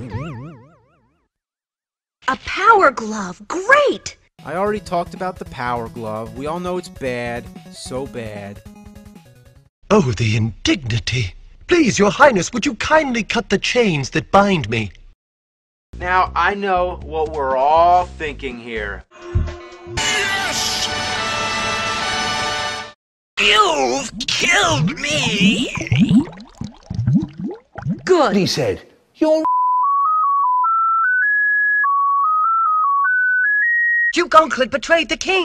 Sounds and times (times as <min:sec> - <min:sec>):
Speech: 0:02.3 - 0:08.6, 0:09.9 - 0:15.0, 0:16.0 - 0:19.0, 0:23.4 - 0:25.9, 0:28.1 - 0:29.5
Music: 0:04.4 - 0:09.7, 0:16.0 - 0:23.0.